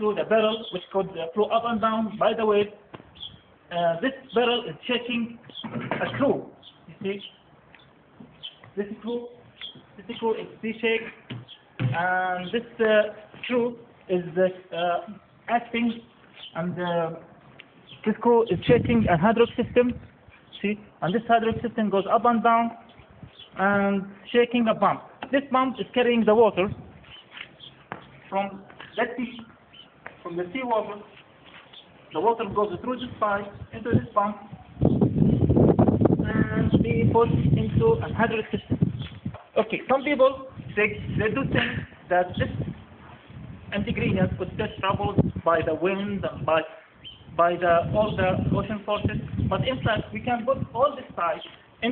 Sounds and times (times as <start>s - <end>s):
Speech: 0.0s - 2.8s, 3.7s - 7.3s, 8.8s - 9.4s, 10.0s - 11.2s, 11.8s - 17.3s, 18.0s - 20.0s, 20.6s - 22.9s, 23.6s - 26.8s, 28.3s - 29.5s, 30.2s - 31.2s, 32.1s - 34.7s, 36.2s - 38.8s, 39.6s - 42.7s, 43.7s - 46.8s, 47.4s - 51.9s.